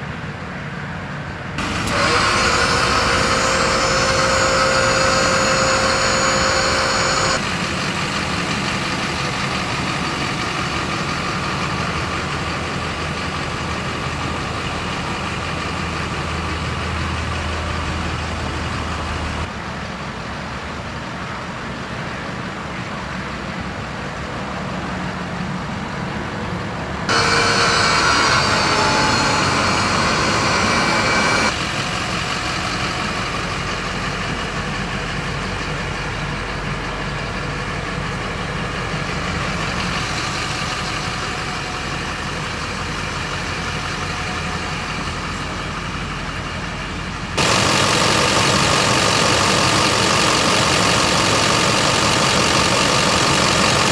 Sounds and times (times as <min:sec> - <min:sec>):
Truck: 0:00.0 - 0:53.9.